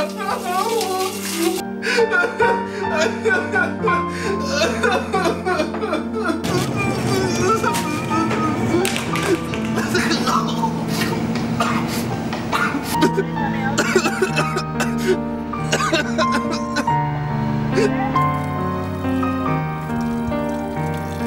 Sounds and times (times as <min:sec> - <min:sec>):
Music: 0:00.0 - 0:21.2.